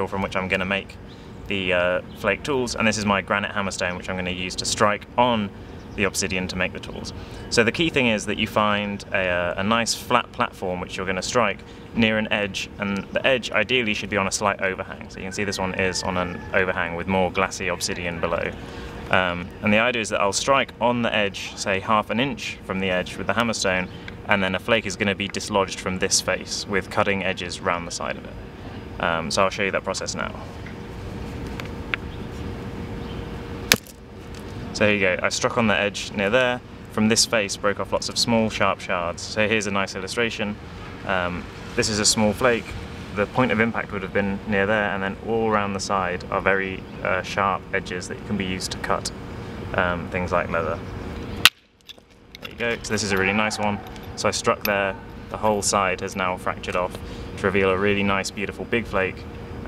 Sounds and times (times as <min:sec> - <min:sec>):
Speech: 0:00.0 - 0:28.4, 0:29.0 - 0:30.5, 0:34.8 - 0:50.8, 0:52.4 - 0:59.6.